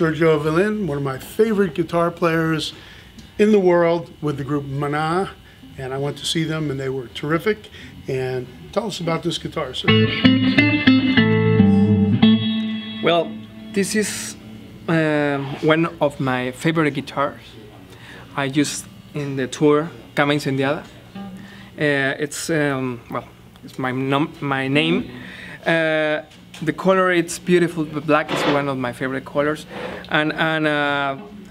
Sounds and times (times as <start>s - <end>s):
Speech: 0.0s - 2.8s, 3.4s - 9.9s, 13.1s - 21.0s, 21.8s - 31.5s
Guitar: 7.6s - 26.8s, 27.6s - 31.5s.